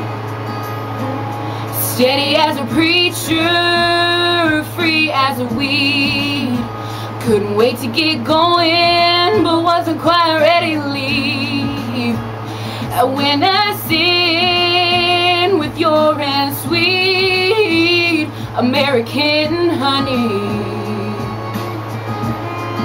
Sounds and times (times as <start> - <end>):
Music: 0.0 - 22.8
Female singing: 1.8 - 12.2, 12.9 - 22.8.